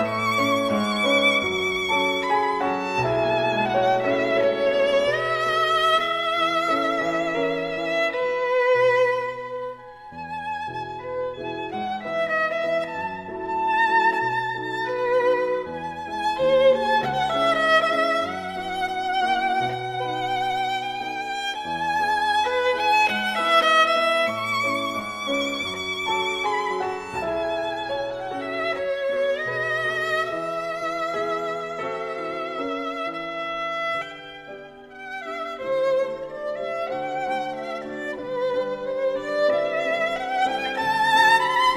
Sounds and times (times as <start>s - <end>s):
Violin, fiddle: 0.0s - 41.7s.